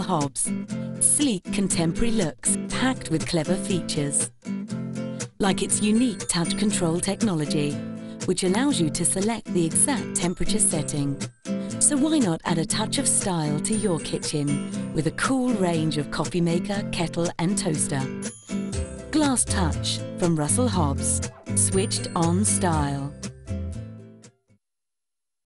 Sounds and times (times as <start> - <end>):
Speech: 0.0 - 4.3, 5.4 - 11.2, 11.8 - 18.1, 19.1 - 23.2
Music: 0.0 - 24.6.